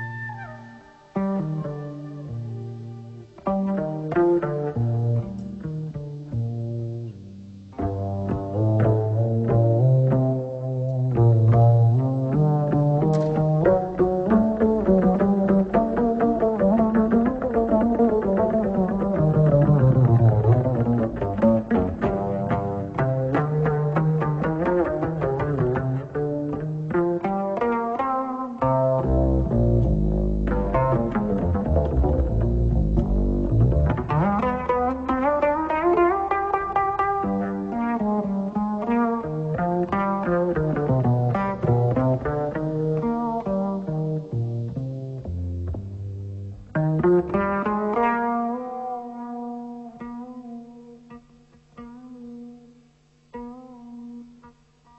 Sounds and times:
Music: 0.0s - 54.9s.

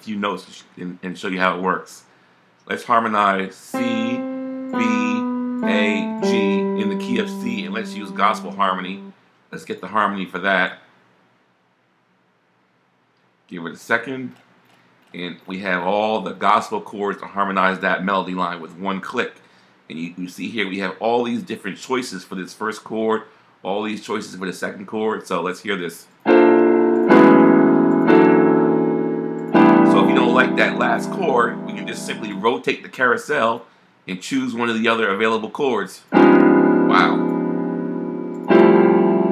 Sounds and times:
Speech: 0.0s - 4.2s, 4.8s - 10.9s, 13.5s - 14.4s, 15.1s - 26.2s, 29.9s - 36.1s, 36.9s - 37.2s.

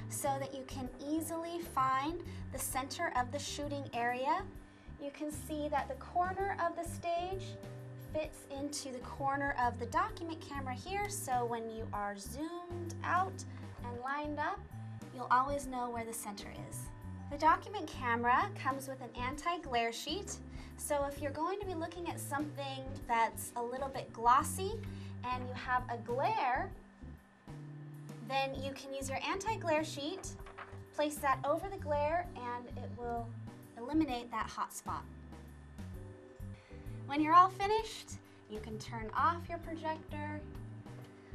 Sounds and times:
Speech: 0.0s - 26.8s, 28.2s - 30.4s, 31.0s - 35.1s, 37.1s - 40.5s
Music: 0.0s - 41.3s.

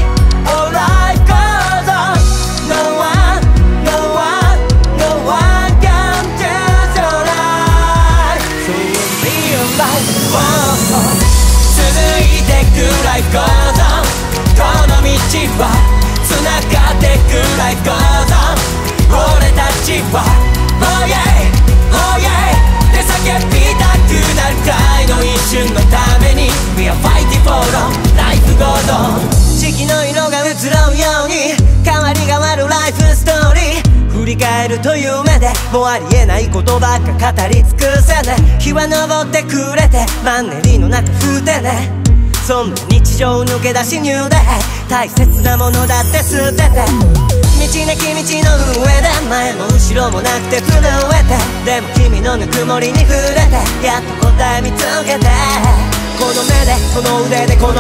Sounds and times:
Music: 0.0s - 57.8s.

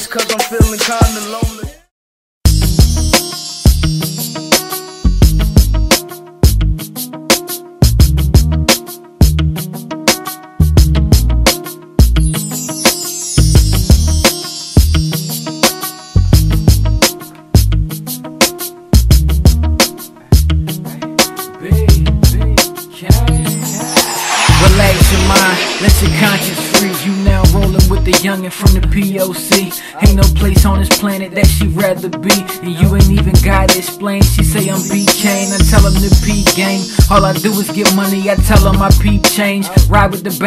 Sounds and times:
Pop music: 0.0s - 1.9s, 2.6s - 40.4s
Background music: 2.5s - 40.4s.

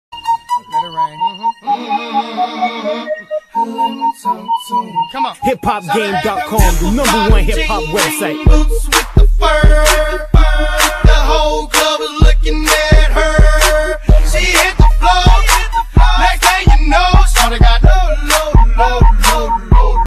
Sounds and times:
Music: 0.1s - 20.0s.

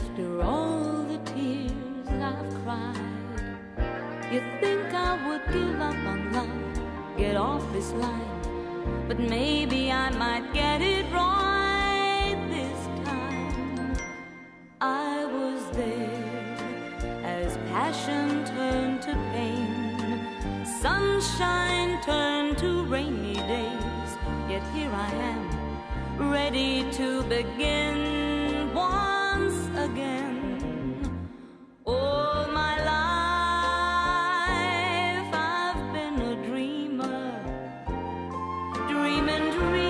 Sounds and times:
Music: 0.0s - 39.8s.

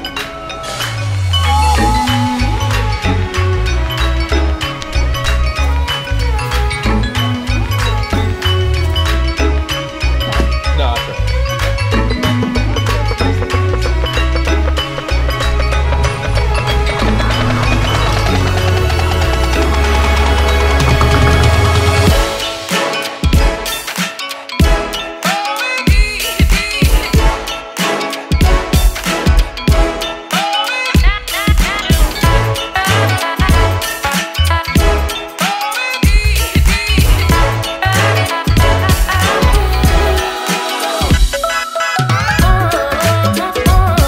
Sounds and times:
Music: 0.0s - 44.0s.

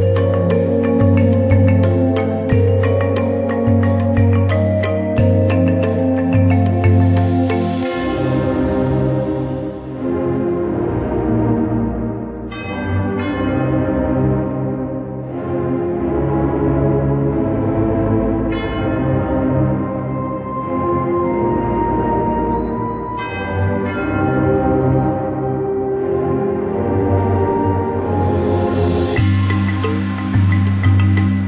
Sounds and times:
Tender music: 0.0s - 31.4s.

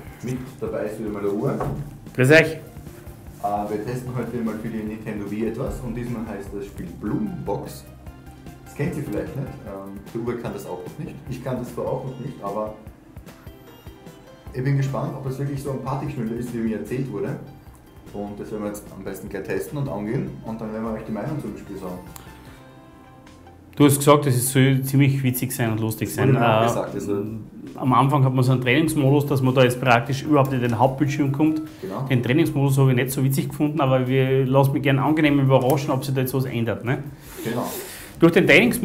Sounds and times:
Speech: 0.2s - 2.6s, 3.4s - 7.9s, 8.8s - 12.8s, 18.1s - 22.0s, 23.8s - 38.8s.

